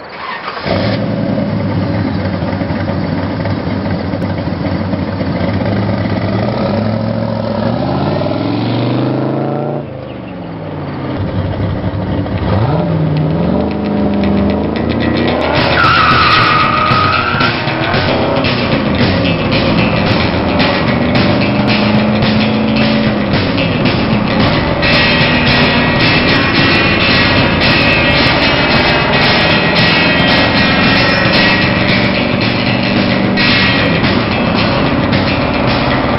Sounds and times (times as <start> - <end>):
Car: 0.0 - 36.1
Outside, rural or natural: 0.0 - 36.1
Music: 5.6 - 10.5, 11.2 - 36.1.